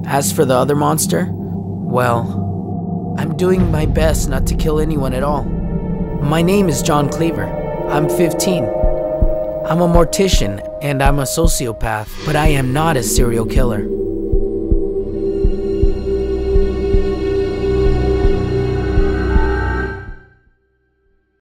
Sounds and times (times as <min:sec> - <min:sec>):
Speech: 0:00.0 - 0:02.4, 0:03.2 - 0:05.5, 0:06.2 - 0:08.8, 0:09.7 - 0:13.9
Scary music: 0:00.0 - 0:20.6.